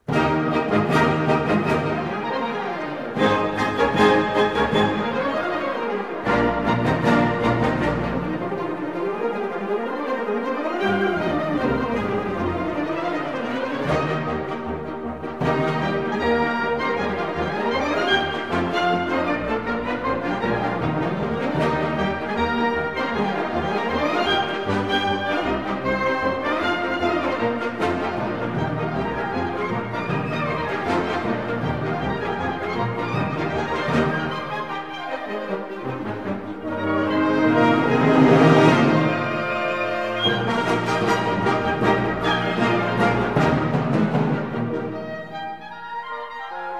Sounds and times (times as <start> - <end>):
Orchestra: 0.0 - 46.7.